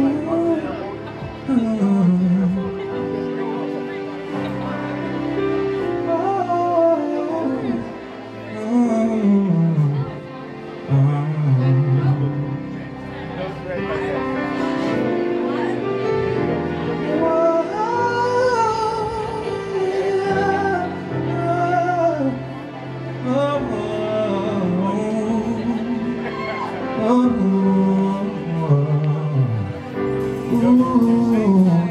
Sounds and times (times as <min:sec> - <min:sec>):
Male singing: 0:00.0 - 0:03.2, 0:05.9 - 0:12.6, 0:17.0 - 0:31.9
Music: 0:00.0 - 0:31.9.